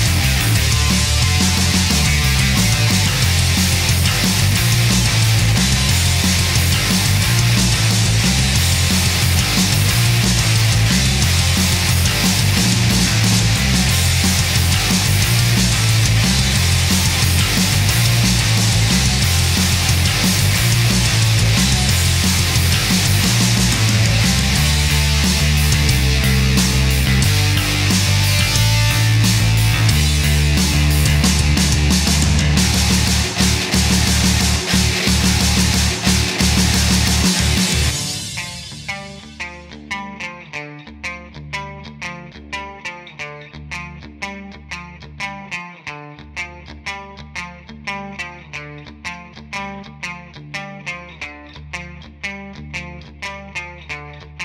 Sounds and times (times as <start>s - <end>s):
Heavy metal: 0.0s - 40.0s
Punk rock: 0.0s - 43.0s
Progressive rock: 0.0s - 54.4s.